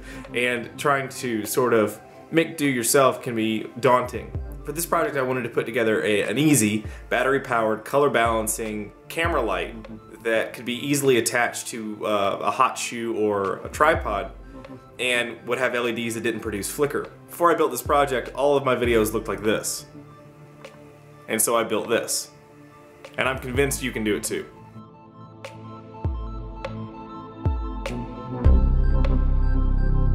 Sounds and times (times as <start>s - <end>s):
Music: 0.0s - 30.1s
Speech: 0.3s - 14.3s, 15.0s - 19.9s, 21.3s - 22.3s, 23.2s - 24.5s.